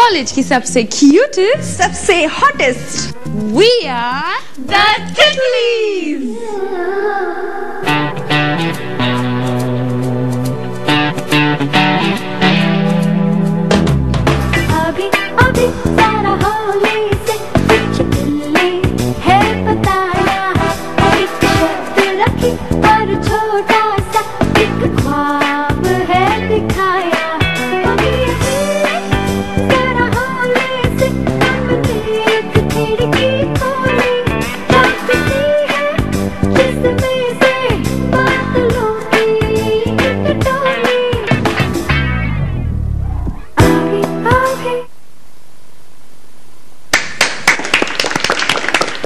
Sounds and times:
Funny music: 0:07.9 - 0:44.7.

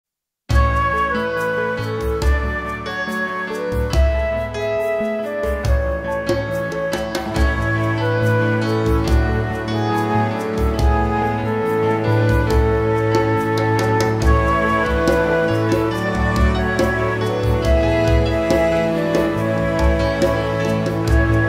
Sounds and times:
Music of Asia: 0:00.5 - 0:21.4
Tender music: 0:00.5 - 0:21.4.

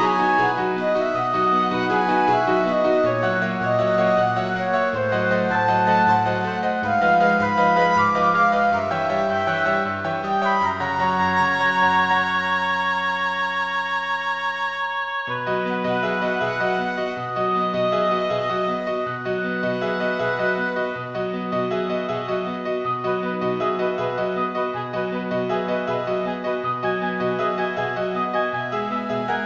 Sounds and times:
Music: 0:00.0 - 0:29.4.

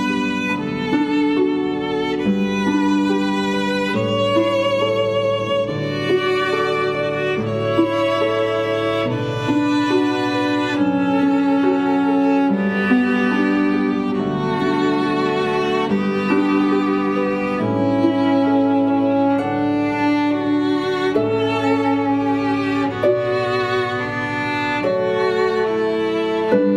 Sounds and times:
Pizzicato: 0:00.0 - 0:26.7.

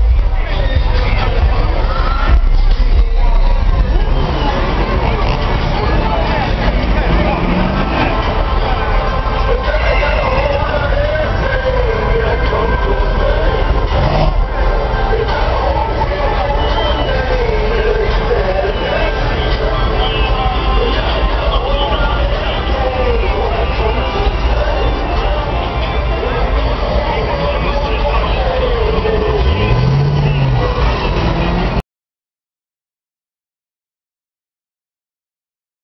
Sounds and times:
Car: 0:00.0 - 0:31.8
Speech: 0:00.0 - 0:31.8.

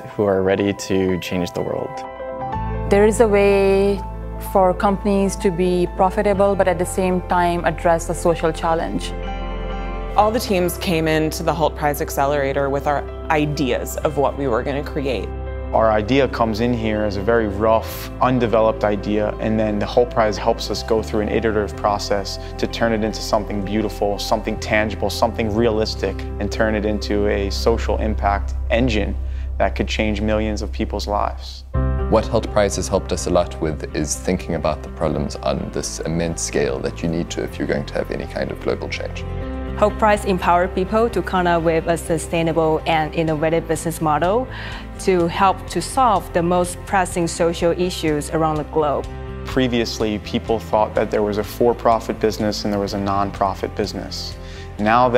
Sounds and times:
Speech: 0:00.0 - 0:02.0, 0:12.7 - 0:39.2, 0:49.5 - 0:55.1
Music: 0:00.0 - 0:55.1.

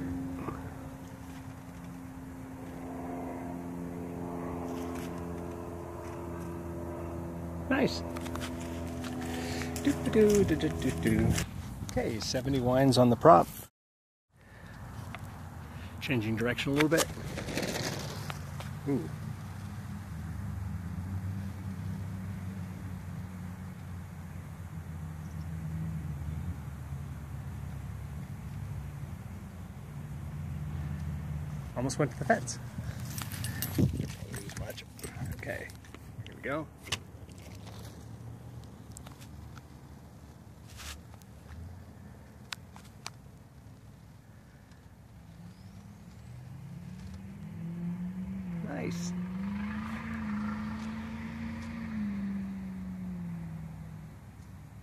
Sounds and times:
Speech: 0:07.7 - 0:08.1, 0:09.8 - 0:13.5, 0:16.0 - 0:17.1, 0:18.8 - 0:19.1, 0:31.8 - 0:32.6, 0:34.1 - 0:35.7, 0:36.3 - 0:36.7, 0:48.6 - 0:49.1.

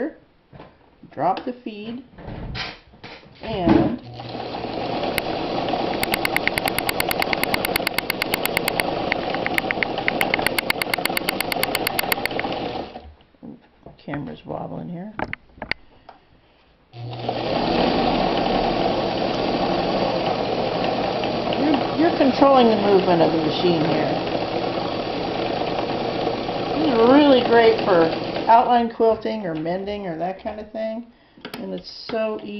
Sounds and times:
Speech: 0:01.1 - 0:02.1, 0:03.4 - 0:04.0, 0:13.4 - 0:15.2, 0:21.6 - 0:24.3, 0:26.8 - 0:32.5
Sewing machine: 0:04.0 - 0:13.0, 0:17.0 - 0:28.6.

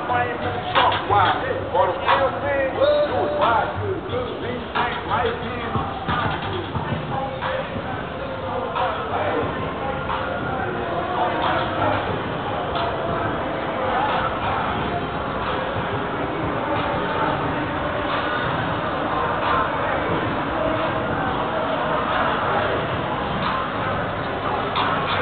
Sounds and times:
Music: 0:00.0 - 0:25.2.

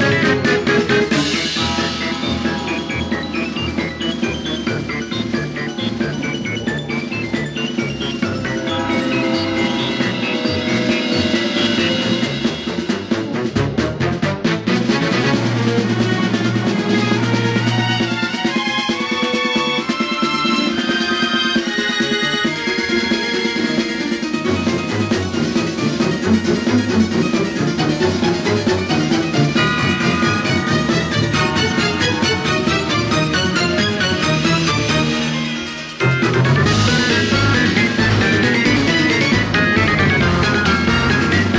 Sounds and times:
Funny music: 0:00.0 - 0:41.5.

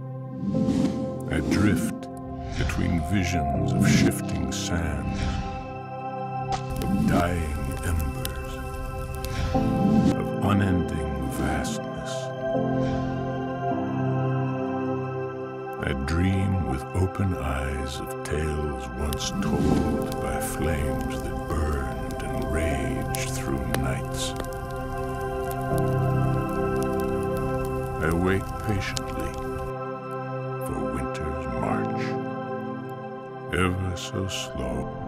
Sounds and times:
New-age music: 0:00.0 - 0:35.0
Speech: 0:01.3 - 0:05.2, 0:06.9 - 0:08.6, 0:10.2 - 0:12.3, 0:15.8 - 0:24.4, 0:28.0 - 0:29.5, 0:30.6 - 0:32.2, 0:33.5 - 0:35.0.

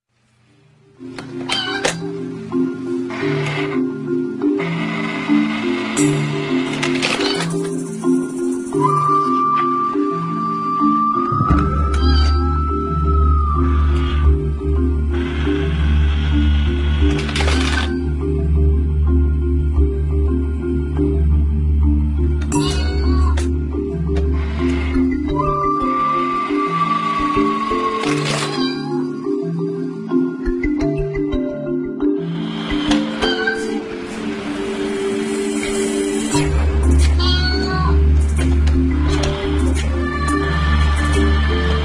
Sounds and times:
Music: 0:00.2 - 0:41.8.

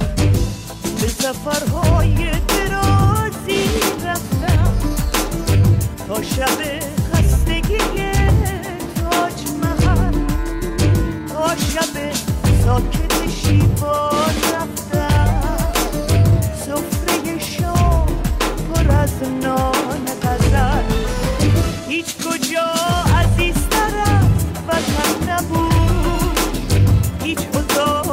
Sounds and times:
Pop music: 0:00.0 - 0:28.1.

